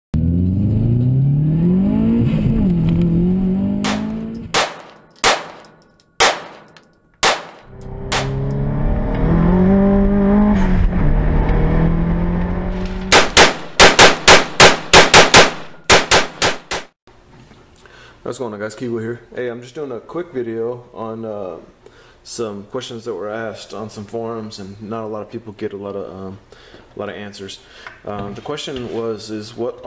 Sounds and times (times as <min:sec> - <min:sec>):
Car: 0:00.2 - 0:04.6, 0:07.7 - 0:13.2
Outside, urban or manmade: 0:00.2 - 0:18.2.